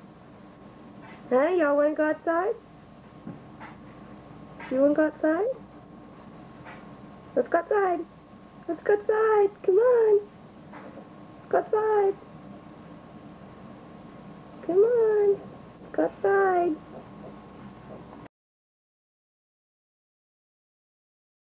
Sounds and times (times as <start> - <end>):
Speech: 1.3 - 2.6, 4.6 - 5.6, 7.4 - 10.3, 11.5 - 12.2, 14.6 - 16.8.